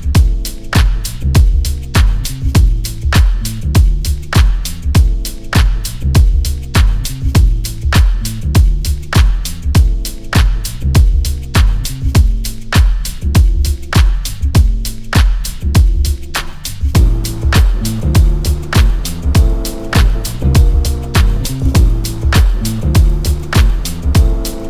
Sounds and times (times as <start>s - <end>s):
Music: 0.0s - 24.6s.